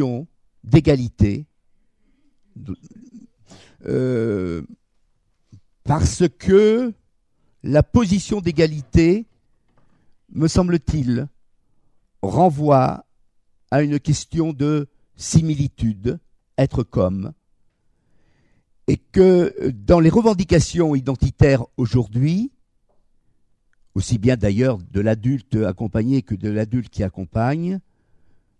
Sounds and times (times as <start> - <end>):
Speech: 0.0 - 1.5, 2.6 - 3.2, 3.8 - 4.8, 5.8 - 7.0, 7.6 - 9.3, 10.3 - 11.4, 12.2 - 13.1, 13.7 - 17.4, 18.9 - 22.6, 24.0 - 27.8.